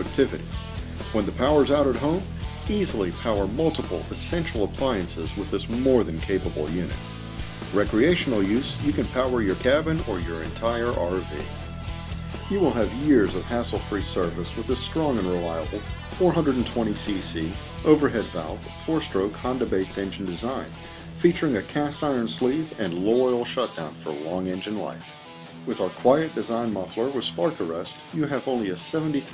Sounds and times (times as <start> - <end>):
Speech: 0.0 - 0.4, 1.1 - 7.0, 7.7 - 11.6, 12.5 - 29.3
Music: 0.0 - 29.3.